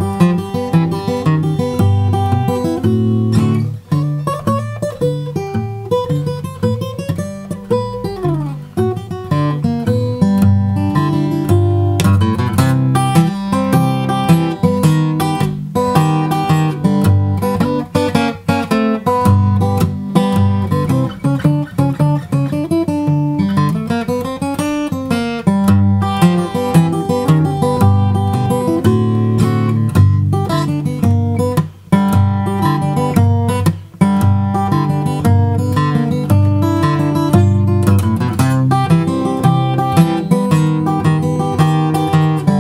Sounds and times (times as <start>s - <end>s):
Guitar: 0.0s - 42.6s.